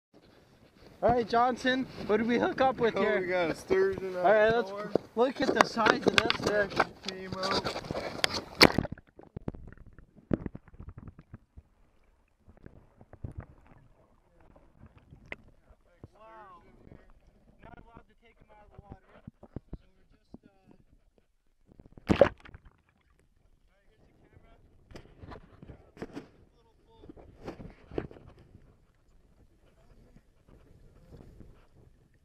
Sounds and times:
Outside, rural or natural: 0.1 - 32.2.

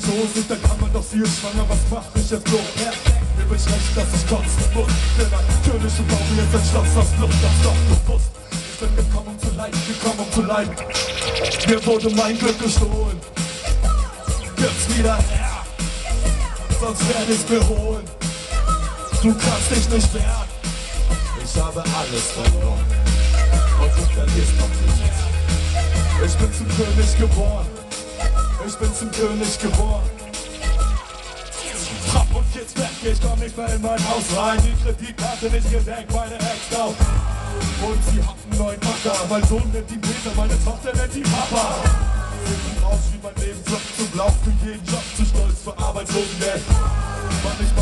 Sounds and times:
Music: 0.0 - 47.8.

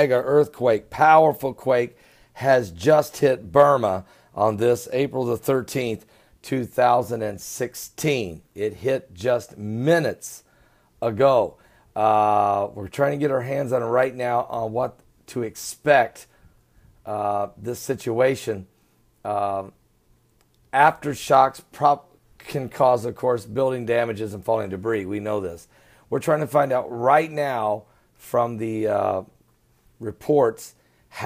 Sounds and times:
Speech: 0.0 - 16.3, 17.1 - 19.8, 20.7 - 29.4, 30.0 - 31.2.

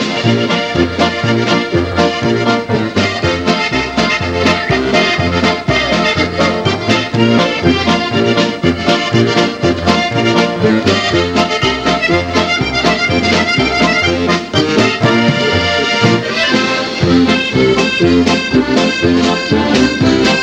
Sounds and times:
Musical instrument: 0.0 - 20.4.

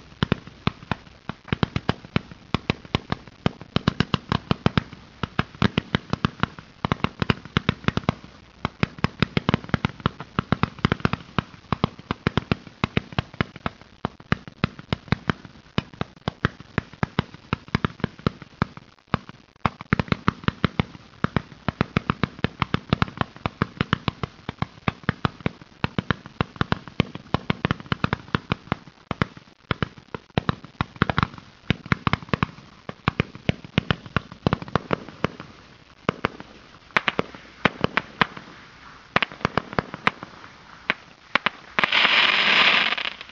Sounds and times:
Fireworks: 0.0 - 43.3.

